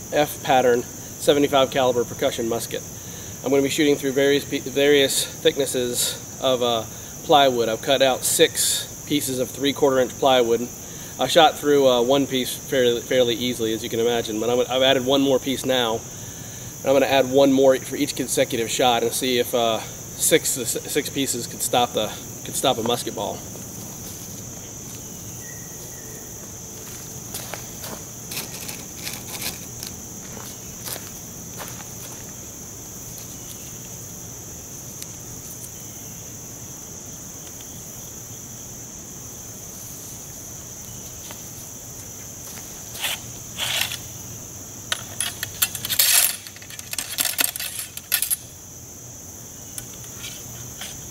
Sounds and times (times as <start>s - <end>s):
Speech: 0.1s - 2.8s, 3.4s - 16.0s, 16.8s - 23.4s.